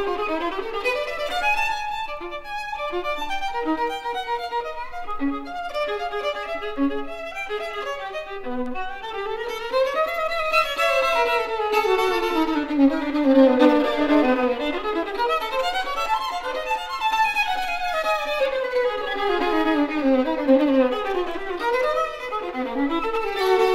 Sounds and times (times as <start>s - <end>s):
Violin, fiddle: 0.0s - 23.7s.